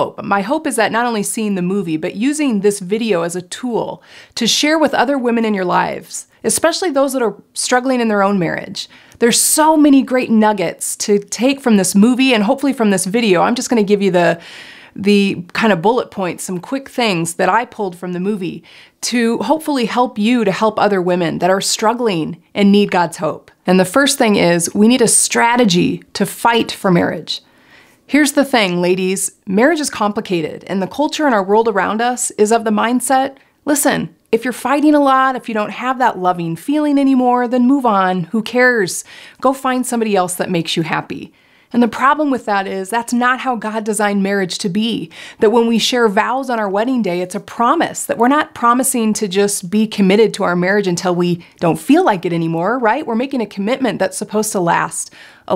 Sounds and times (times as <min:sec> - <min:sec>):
Speech: 0:00.0 - 0:14.4, 0:15.0 - 0:27.4, 0:28.1 - 0:55.5
Inside, small room: 0:00.0 - 0:55.5.